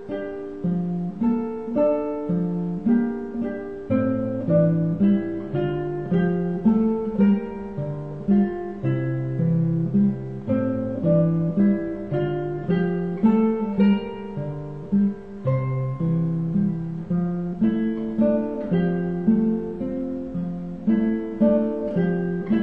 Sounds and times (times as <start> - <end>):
Acoustic guitar: 0.0 - 22.6
Strum: 0.0 - 22.6.